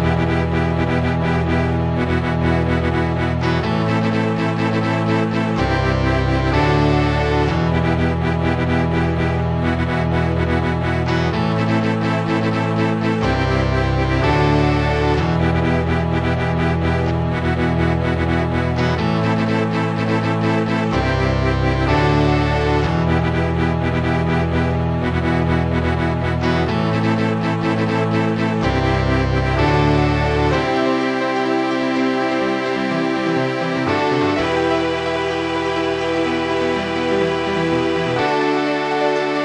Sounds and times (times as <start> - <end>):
Musical instrument: 0.0 - 39.4
Video game music: 0.0 - 39.4.